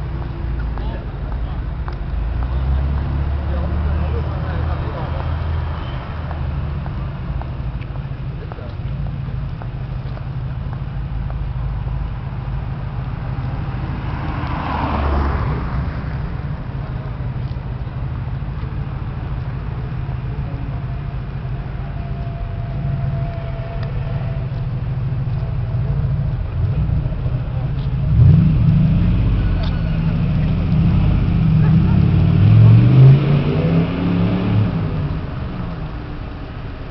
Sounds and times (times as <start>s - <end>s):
Speech: 0.7s - 6.2s, 8.2s - 9.0s, 29.0s - 32.4s.